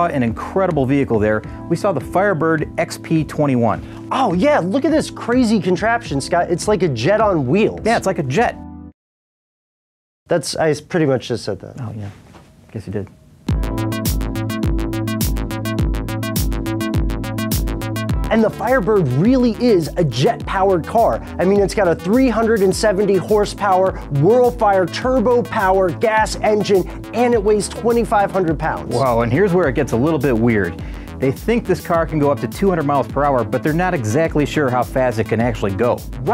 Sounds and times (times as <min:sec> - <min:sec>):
Speech: 0:00.0 - 0:08.6, 0:10.3 - 0:13.1, 0:18.3 - 0:36.3
Music: 0:00.0 - 0:09.0, 0:13.4 - 0:36.3.